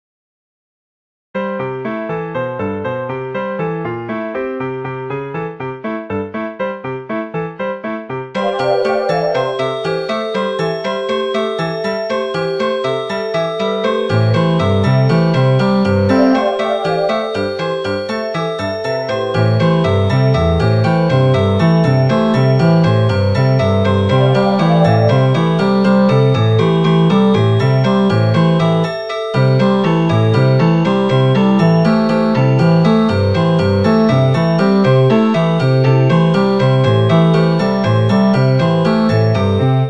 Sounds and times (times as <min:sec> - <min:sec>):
Music: 0:01.4 - 0:39.9.